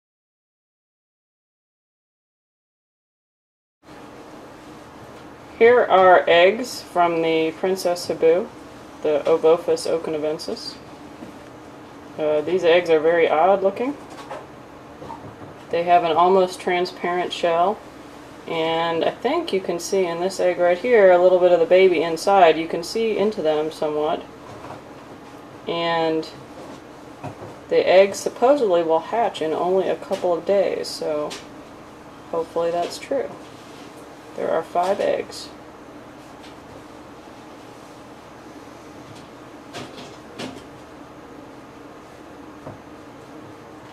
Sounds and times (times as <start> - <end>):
Inside, small room: 3.9 - 43.9
Speech: 5.6 - 10.8, 12.2 - 14.0, 15.7 - 17.8, 18.5 - 24.3, 25.7 - 26.4, 27.7 - 31.4, 32.3 - 33.4, 34.4 - 35.6.